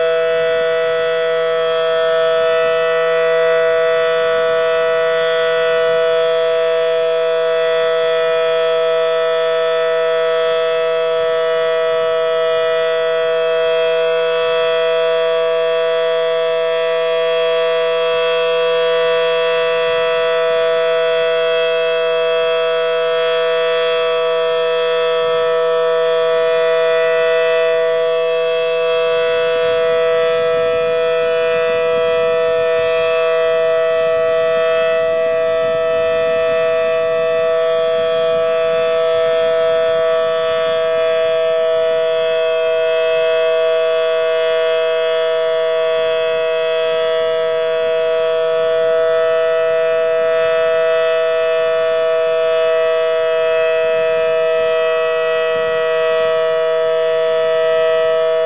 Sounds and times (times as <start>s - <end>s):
Civil defense siren: 0.0s - 58.4s.